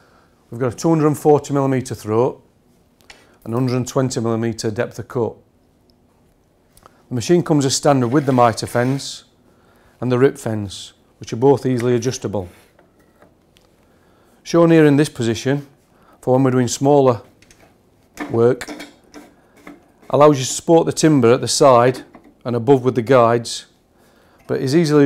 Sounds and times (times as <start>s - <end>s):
Speech: 0.5s - 2.5s, 3.4s - 5.4s, 7.1s - 9.3s, 10.0s - 12.6s, 14.4s - 17.3s, 18.2s - 18.8s, 20.1s - 23.8s, 24.5s - 25.0s.